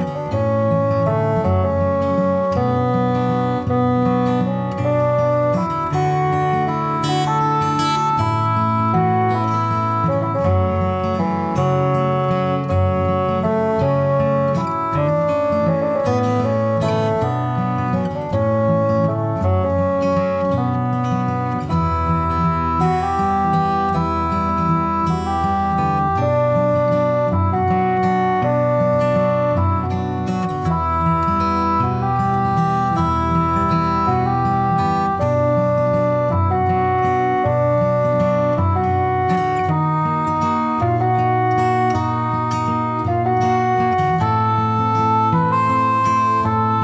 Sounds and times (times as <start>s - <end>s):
Music: 0.0s - 46.8s.